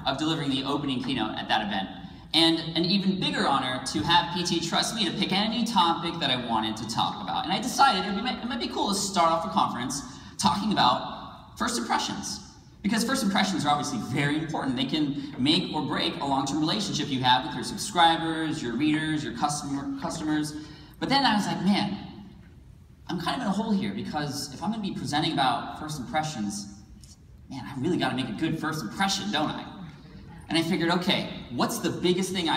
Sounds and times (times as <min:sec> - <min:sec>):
Male speech, man speaking: 0:00.0 - 0:22.0, 0:23.1 - 0:26.8, 0:27.5 - 0:32.5
Narration, monologue: 0:00.0 - 0:32.5.